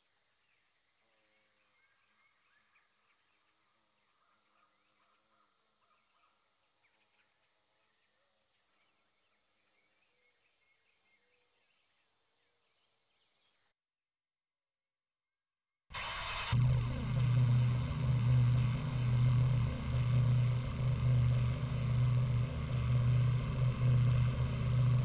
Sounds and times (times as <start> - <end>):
Heavy engine (low frequency): 16.0 - 25.0.